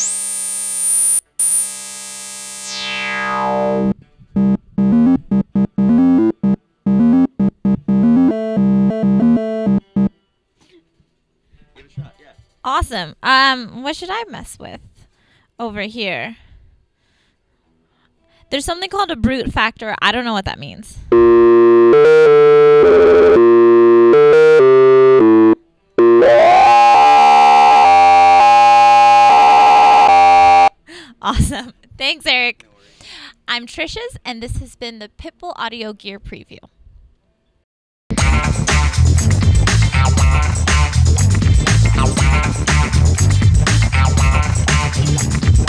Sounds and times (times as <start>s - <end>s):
Synthesizer: 2.6s - 10.1s, 21.2s - 28.8s.